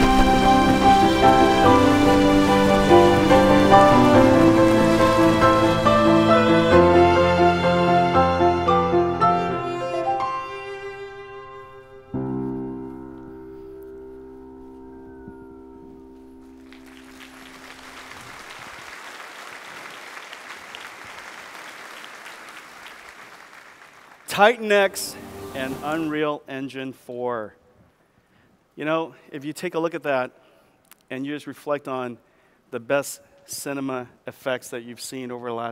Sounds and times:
Violin, fiddle: 0.0 - 12.9.

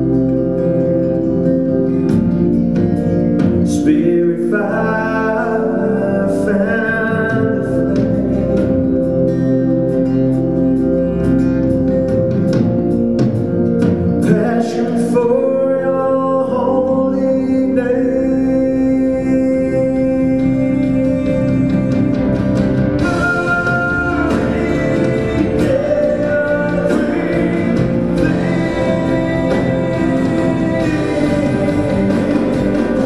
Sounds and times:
Inside, large room or hall: 0.0 - 33.0
Music: 0.0 - 33.0
Singing: 14.2 - 33.0.

